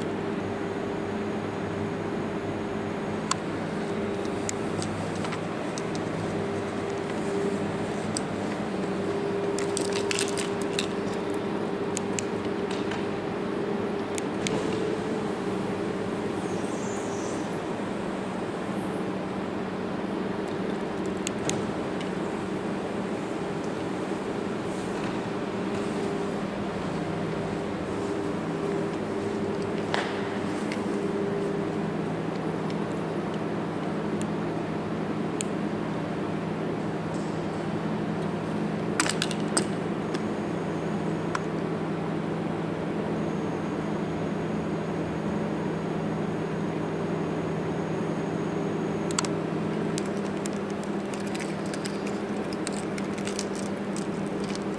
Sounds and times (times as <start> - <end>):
Vehicle: 0.0 - 54.7.